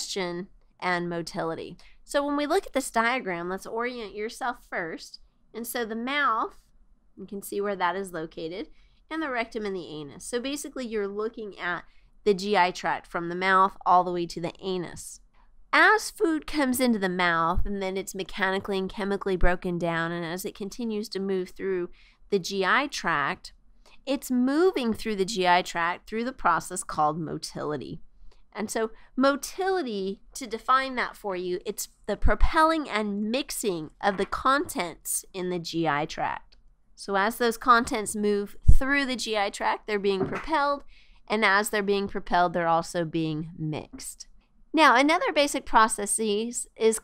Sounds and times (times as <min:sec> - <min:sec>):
Speech: 0:00.0 - 0:06.6, 0:07.2 - 0:15.2, 0:15.8 - 0:28.0, 0:28.6 - 0:44.2, 0:44.8 - 0:47.0.